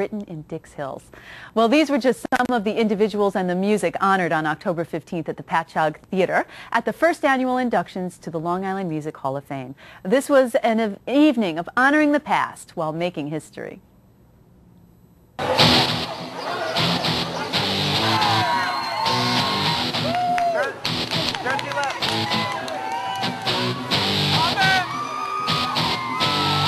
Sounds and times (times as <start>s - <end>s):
Music: 15.4s - 26.6s.